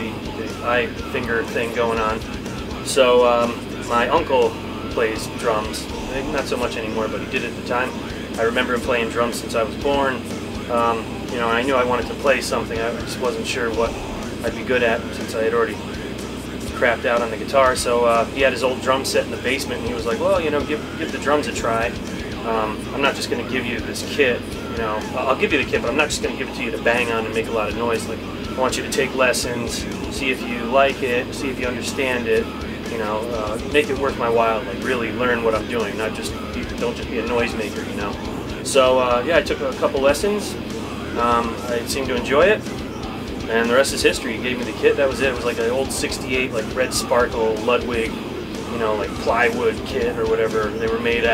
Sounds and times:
Speech: 0:00.0 - 0:42.8, 0:43.4 - 0:51.3
Music: 0:00.0 - 0:51.3.

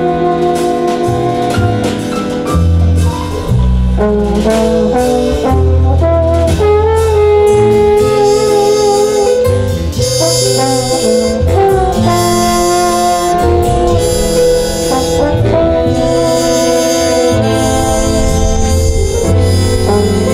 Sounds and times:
Jazz: 0:00.0 - 0:20.3.

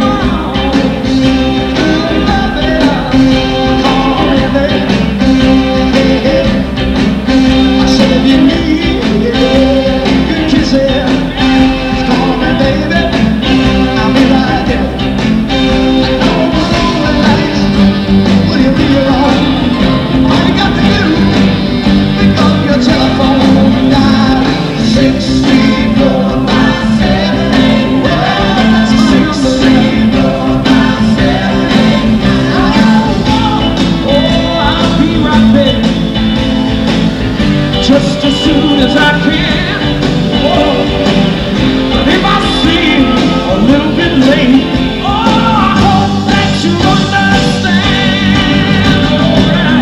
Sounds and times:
Singing: 0:00.0 - 0:36.1, 0:37.7 - 0:49.8
Inside, large room or hall: 0:00.0 - 0:49.8
Pop music: 0:00.0 - 0:49.8.

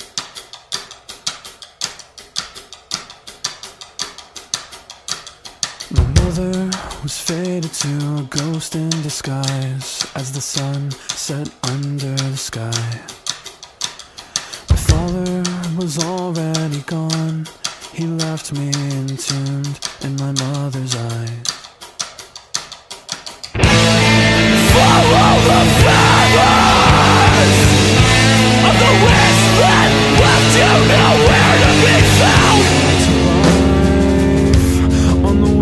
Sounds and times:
Music: 0:05.8 - 0:08.5, 0:21.6 - 0:35.6.

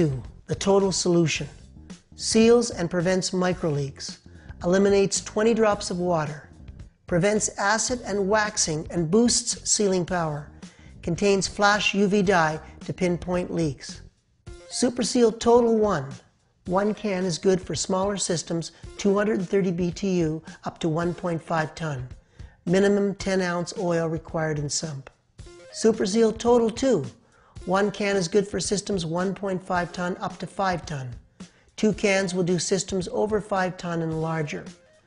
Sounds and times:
Speech: 0:00.0 - 0:01.6, 0:02.2 - 0:06.5, 0:07.1 - 0:14.0, 0:14.7 - 0:25.2, 0:25.8 - 0:31.2, 0:31.8 - 0:34.8
Music: 0:00.0 - 0:35.0.

